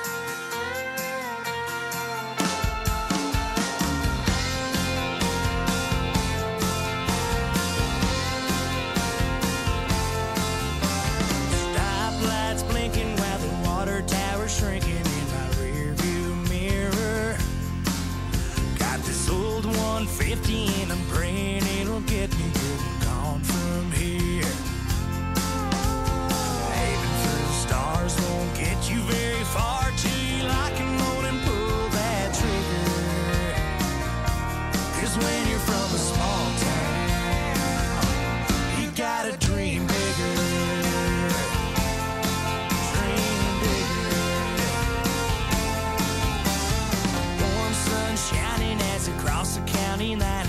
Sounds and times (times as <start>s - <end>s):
Music: 0.0s - 50.4s.